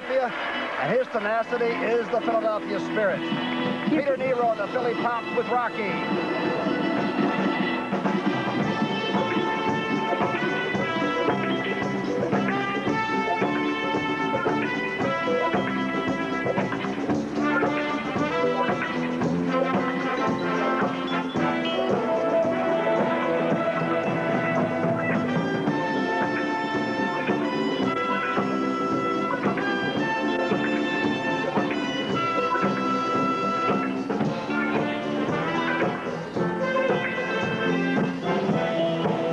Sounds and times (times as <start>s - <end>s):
Orchestra: 0.0s - 39.3s.